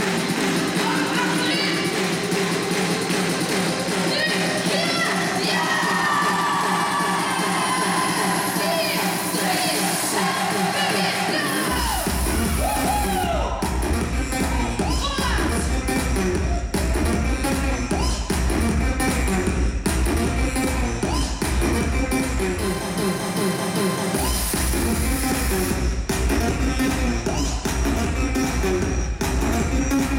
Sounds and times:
Crowd: 0:00.0 - 0:30.1.

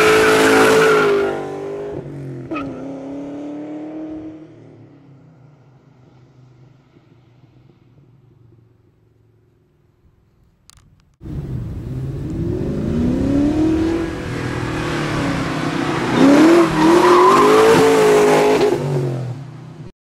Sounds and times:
Skidding: 0:05.4 - 0:19.6.

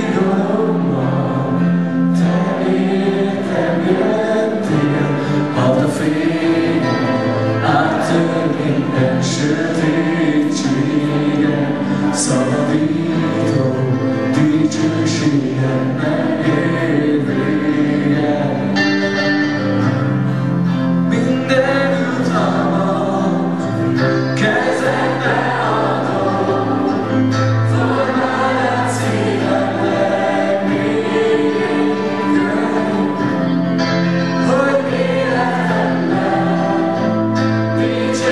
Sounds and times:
Music: 0:00.0 - 0:38.3.

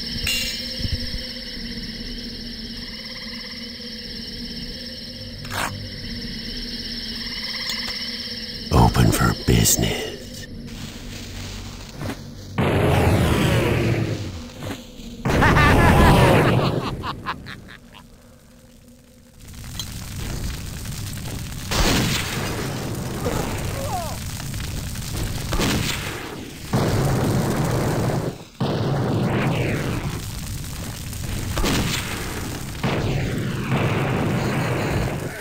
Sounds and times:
Eruption: 0:00.0 - 0:35.4.

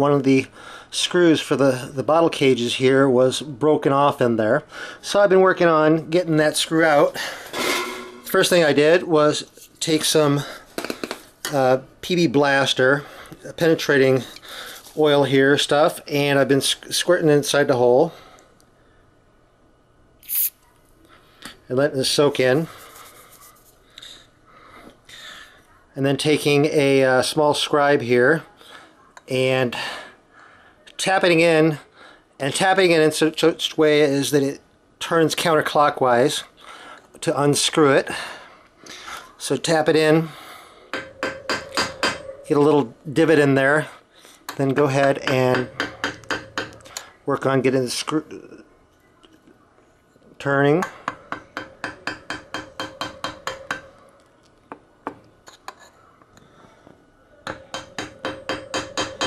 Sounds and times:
Speech: 0:00.0 - 0:07.2, 0:08.3 - 0:10.6, 0:11.5 - 0:14.2, 0:15.0 - 0:18.2, 0:21.7 - 0:22.7, 0:25.8 - 0:30.1, 0:30.8 - 0:36.5, 0:37.2 - 0:38.1, 0:39.1 - 0:40.4, 0:42.5 - 0:45.7, 0:47.2 - 0:48.7, 0:50.4 - 0:51.0.

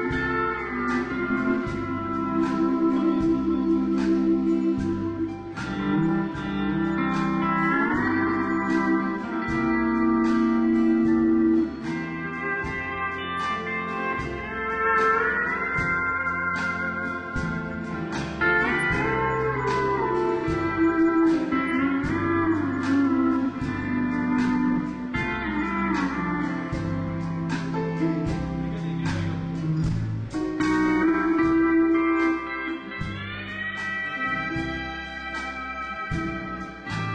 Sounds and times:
Plucked string instrument: 0:00.0 - 0:37.1.

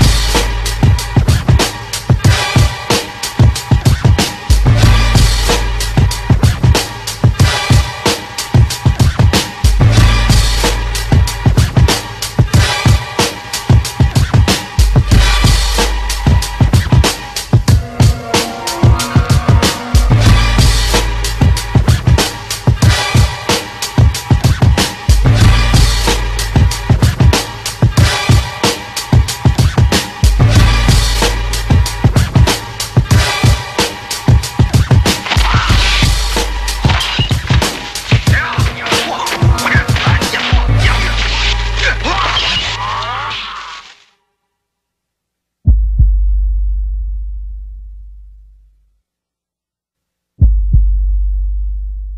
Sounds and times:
Music: 0:00.0 - 0:45.0, 0:45.7 - 0:49.4, 0:50.4 - 0:52.1.

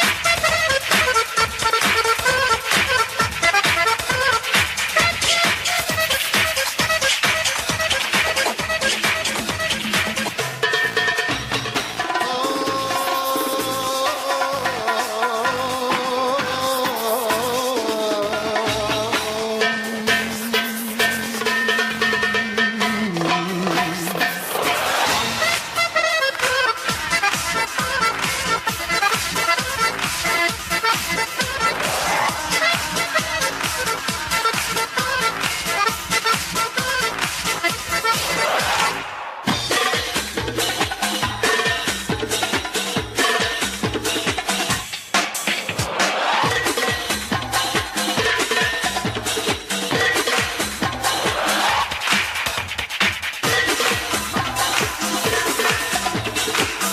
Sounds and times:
Folk music: 0:11.2 - 0:42.4.

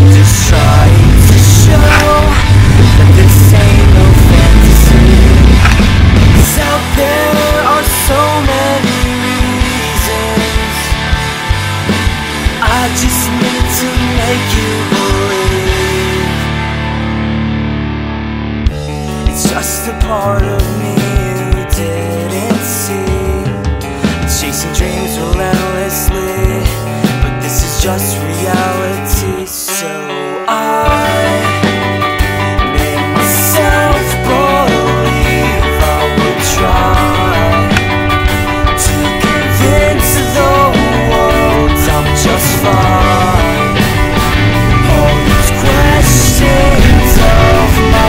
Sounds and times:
Grunge: 0:00.0 - 0:48.0.

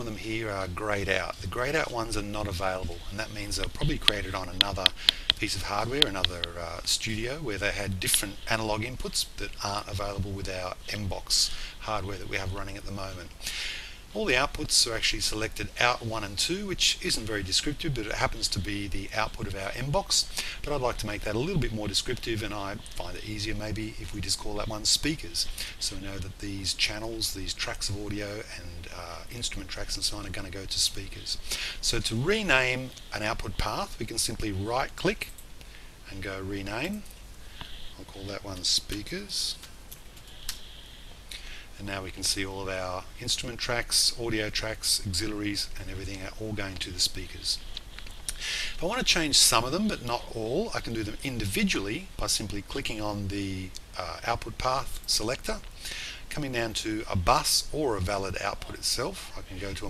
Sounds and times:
Speech: 0:00.0 - 0:35.3, 0:36.0 - 0:37.1, 0:38.0 - 0:39.6, 0:41.3 - 0:47.6, 0:48.4 - 0:59.9.

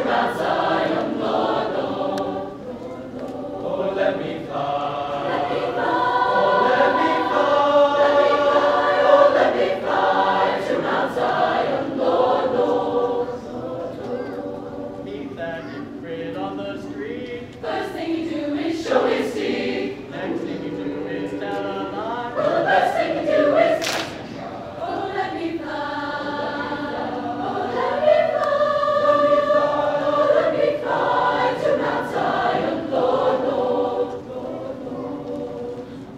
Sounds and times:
Choir: 0:00.0 - 0:36.1.

